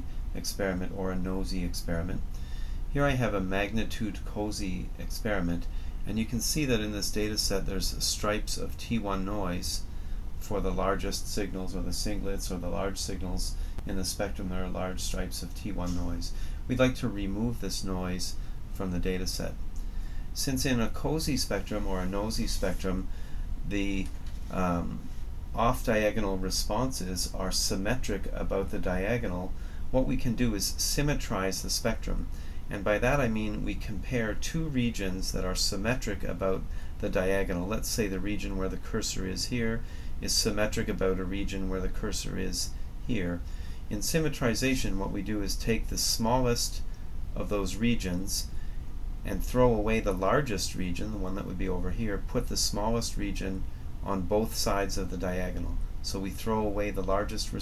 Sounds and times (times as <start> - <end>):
Speech: 0.0 - 2.3, 2.9 - 19.6, 20.4 - 48.5, 49.2 - 57.6.